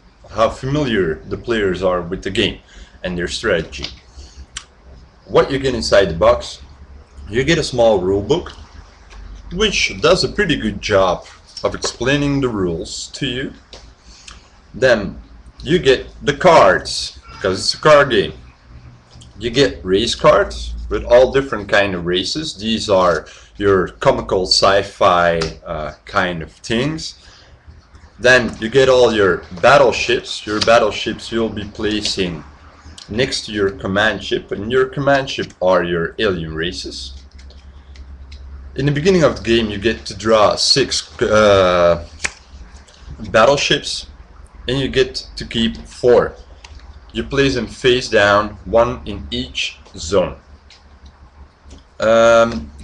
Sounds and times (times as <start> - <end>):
Speech: 0.3 - 4.0, 5.2 - 6.7, 7.3 - 8.8, 9.4 - 13.6, 14.7 - 18.5, 19.2 - 27.2, 28.2 - 37.2, 38.8 - 42.3, 43.1 - 44.1, 44.7 - 46.4, 47.1 - 50.5, 52.0 - 52.8.